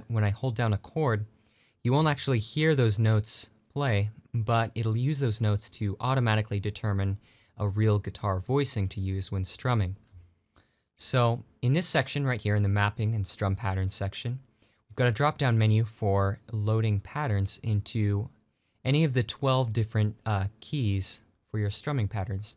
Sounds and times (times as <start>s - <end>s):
Speech: 0.0s - 10.1s, 11.0s - 22.5s.